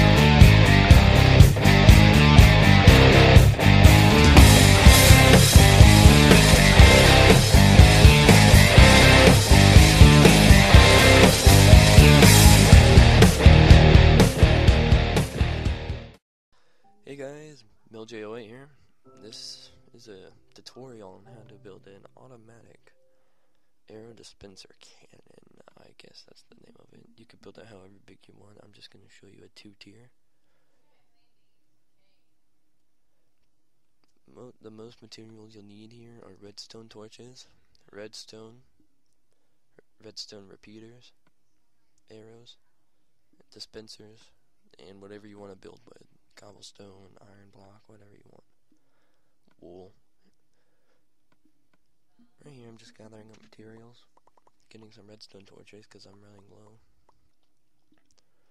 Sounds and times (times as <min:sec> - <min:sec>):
Rock music: 0:00.0 - 0:16.2
Speech: 0:17.0 - 0:23.0, 0:23.9 - 0:30.2, 0:30.8 - 0:32.3, 0:34.2 - 0:38.7, 0:39.8 - 0:41.2, 0:42.0 - 0:42.6, 0:43.4 - 0:48.5, 0:49.5 - 0:50.0, 0:52.2 - 0:54.1, 0:54.7 - 0:56.8.